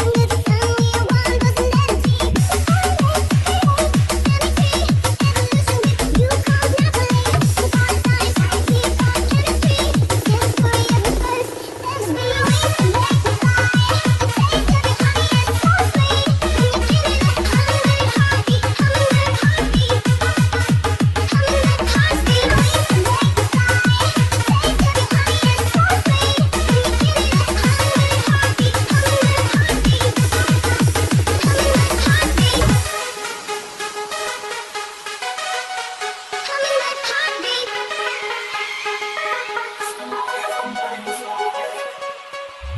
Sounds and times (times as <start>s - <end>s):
Music: 0.0s - 42.7s.